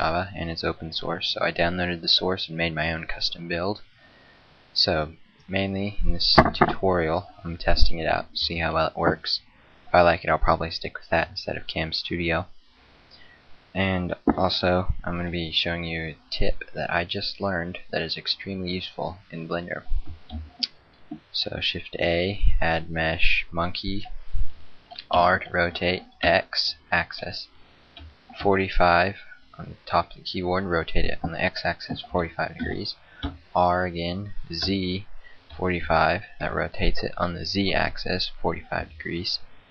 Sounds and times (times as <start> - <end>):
Speech: 0.0 - 3.8, 4.8 - 12.5, 13.8 - 19.9, 21.3 - 24.1, 25.0 - 27.5, 28.4 - 33.0, 33.6 - 39.5.